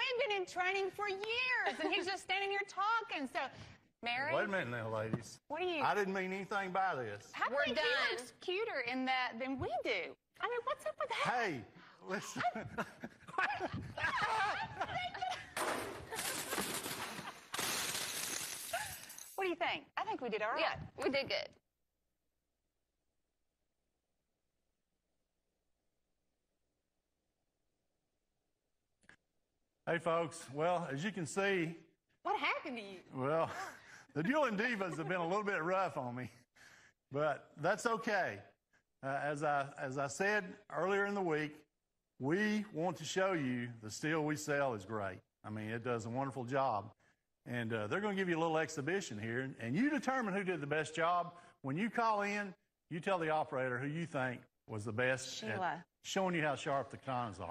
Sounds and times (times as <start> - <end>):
Shatter: 15.6 - 19.4.